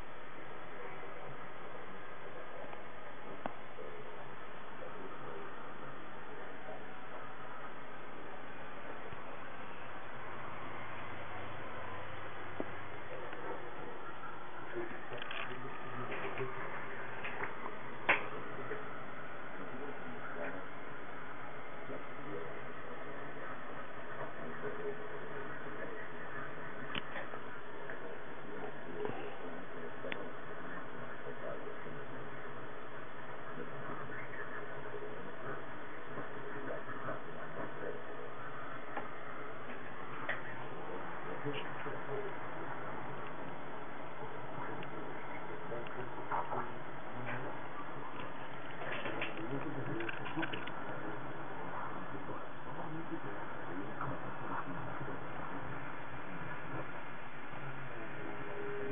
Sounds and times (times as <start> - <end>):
Speech: 0.0 - 58.9.